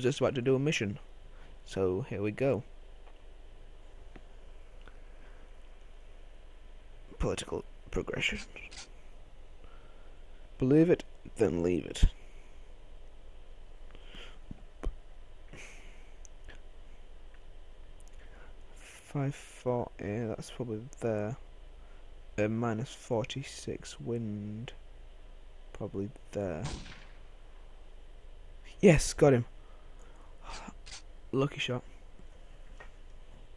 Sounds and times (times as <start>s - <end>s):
Speech: 0.0s - 2.7s, 7.1s - 8.9s, 10.6s - 12.2s, 18.8s - 21.4s, 22.4s - 24.8s, 25.7s - 26.8s, 28.7s - 29.5s, 31.3s - 31.9s.